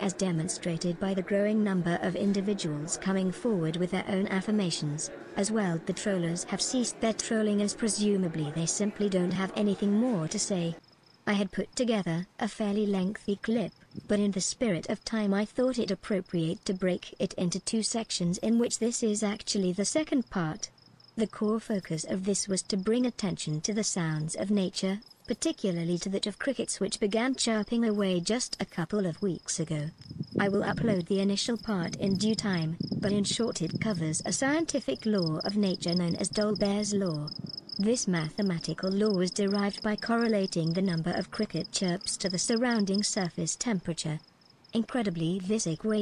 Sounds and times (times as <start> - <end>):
Cricket: 10.8 - 11.2, 30.0 - 30.4, 37.3 - 37.8.